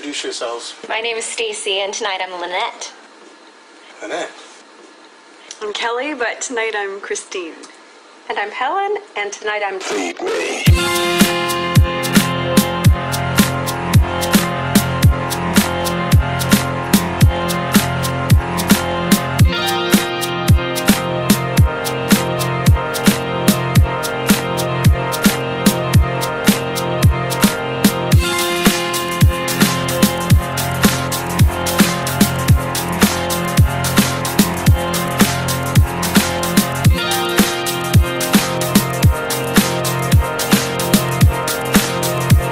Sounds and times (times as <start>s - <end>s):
Music: 10.7s - 42.5s.